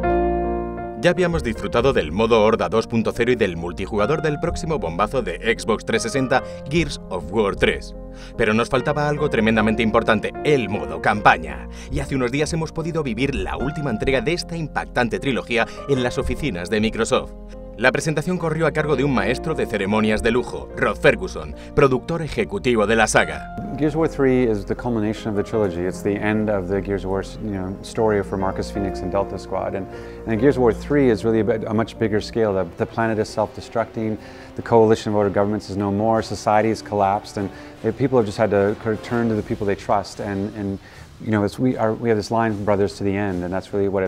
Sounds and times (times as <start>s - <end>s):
Music: 0.0s - 44.0s
Speech: 1.0s - 44.0s.